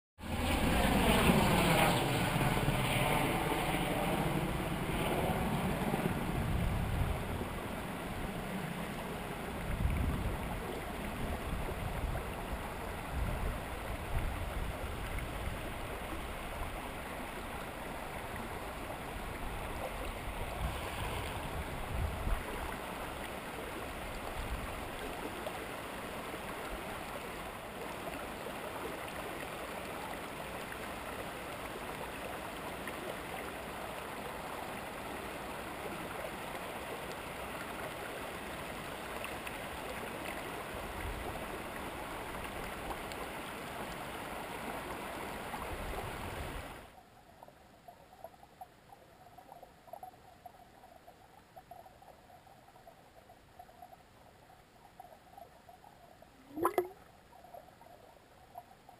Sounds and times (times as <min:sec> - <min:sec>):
Stream: 0:00.2 - 0:58.9.